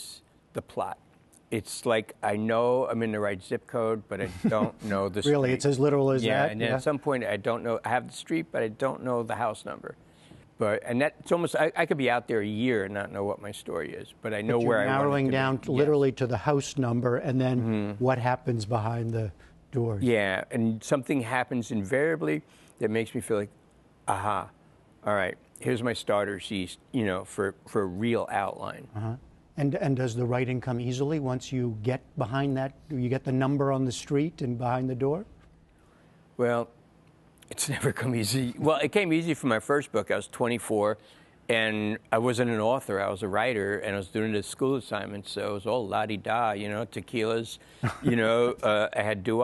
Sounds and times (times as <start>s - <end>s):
Speech: 0.0s - 1.0s, 1.6s - 10.0s, 10.6s - 23.5s, 24.1s - 35.3s, 36.4s - 36.7s, 37.5s - 49.4s.